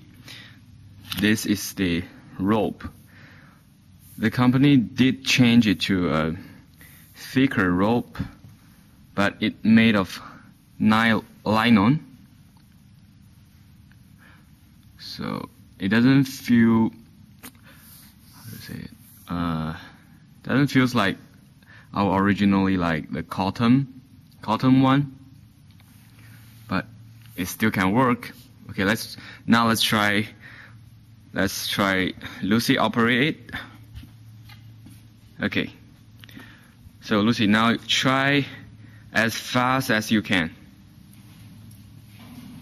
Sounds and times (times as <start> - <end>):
Speech: 1.1 - 3.0, 4.2 - 6.6, 7.2 - 8.4, 9.2 - 12.1, 15.0 - 17.0, 18.3 - 21.3, 21.9 - 25.2, 26.7 - 30.4, 31.3 - 33.8, 35.4 - 35.9, 37.0 - 40.7.